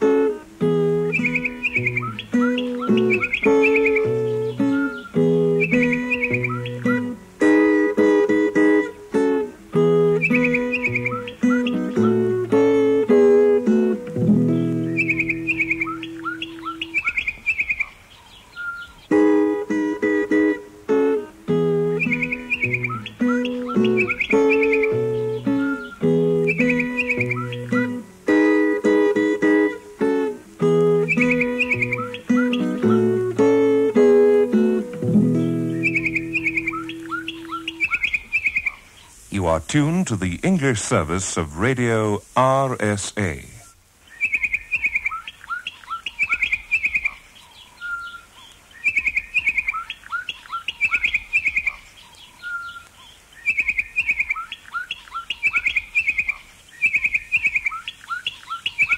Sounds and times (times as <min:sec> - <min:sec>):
Music: 0:00.0 - 0:16.9, 0:19.1 - 0:38.0.